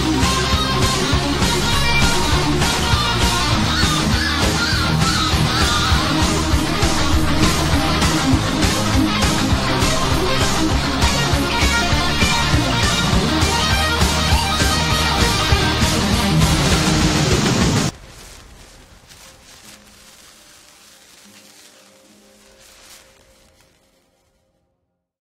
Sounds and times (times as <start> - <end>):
Music: 0.0 - 25.2.